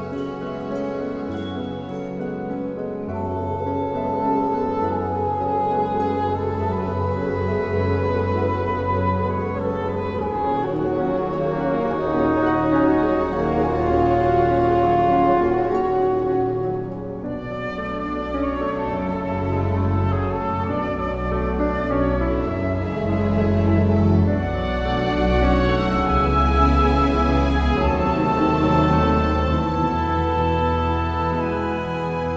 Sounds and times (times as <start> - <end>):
Music: 0.0 - 32.3.